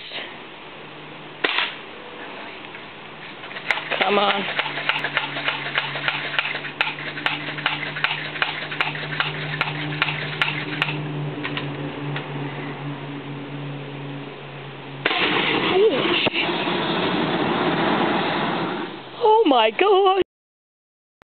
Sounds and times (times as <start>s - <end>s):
Speech: 4.0s - 4.5s, 19.2s - 20.2s.